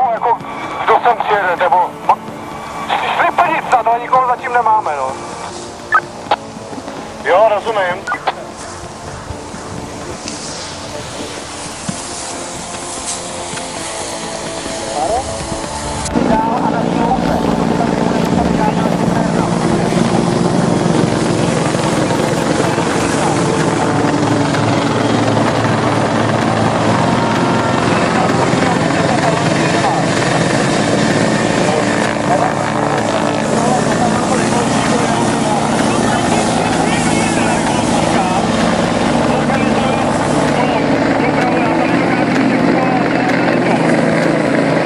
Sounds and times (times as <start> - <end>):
Speech: 0.0 - 1.9, 2.9 - 5.2, 14.9 - 15.3, 16.2 - 20.0, 28.0 - 30.3, 31.6 - 44.1
Helicopter: 0.0 - 44.8
Music: 0.0 - 44.8.